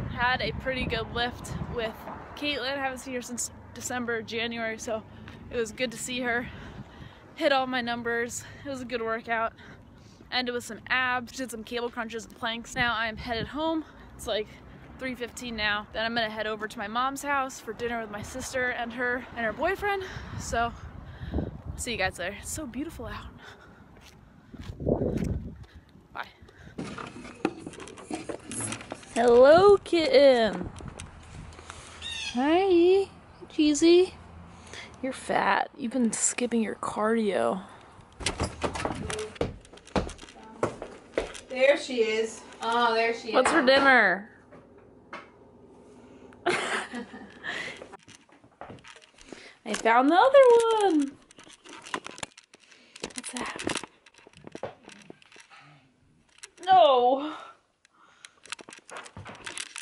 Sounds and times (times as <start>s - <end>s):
Outside, rural or natural: 0.0s - 59.8s.